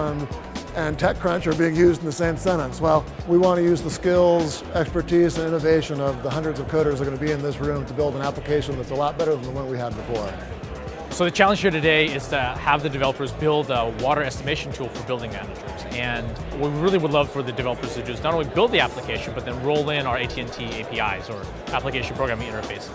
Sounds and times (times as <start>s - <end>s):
Speech: 0.0s - 10.4s, 11.1s - 22.9s
Music: 0.0s - 22.9s.